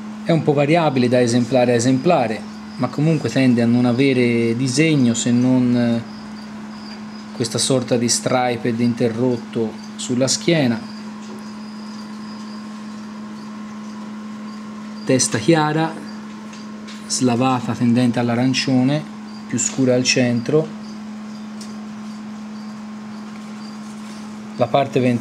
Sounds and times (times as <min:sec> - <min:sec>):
Speech: 0:00.2 - 0:06.1, 0:07.4 - 0:10.9, 0:15.1 - 0:16.2, 0:17.1 - 0:20.8, 0:24.6 - 0:25.2.